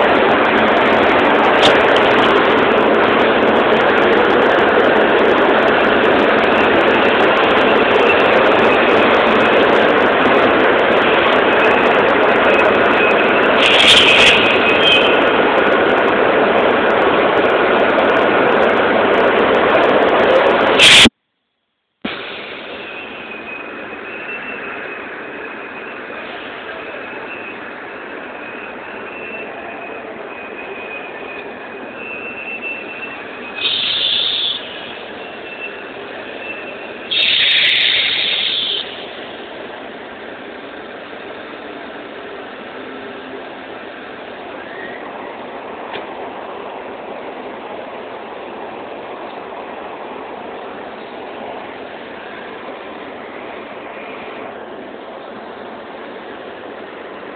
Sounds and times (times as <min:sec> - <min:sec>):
Railroad car, train wagon: 0:00.0 - 0:21.2, 0:22.0 - 0:57.3
Train: 0:00.0 - 0:21.2, 0:22.0 - 0:57.3.